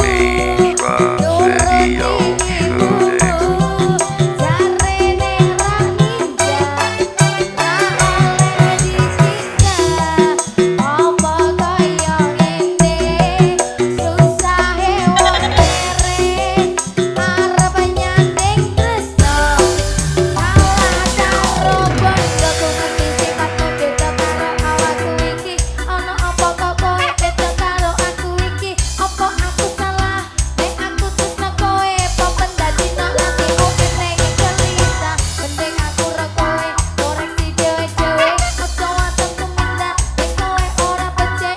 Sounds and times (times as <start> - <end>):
Music: 0.0 - 41.5.